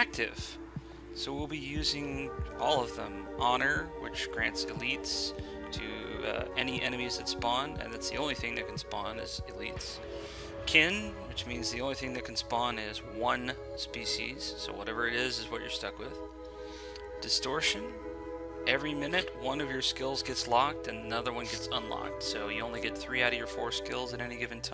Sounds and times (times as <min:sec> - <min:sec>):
Speech: 0:00.0 - 0:00.6, 0:01.2 - 0:10.0, 0:10.6 - 0:16.2, 0:17.2 - 0:18.0, 0:18.7 - 0:24.7
Music: 0:00.0 - 0:24.7.